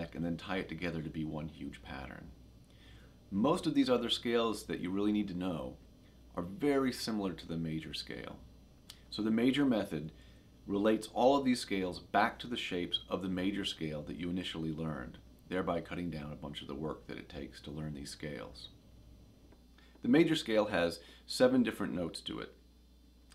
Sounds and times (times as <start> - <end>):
Speech: 0.0 - 2.4, 3.3 - 8.4, 9.1 - 18.8, 20.0 - 22.6.